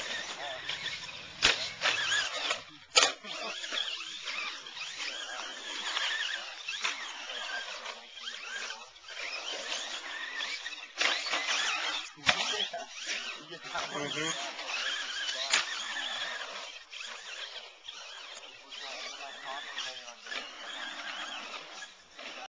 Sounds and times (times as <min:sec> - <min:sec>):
Speech: 0:12.2 - 0:15.8, 0:18.5 - 0:20.2.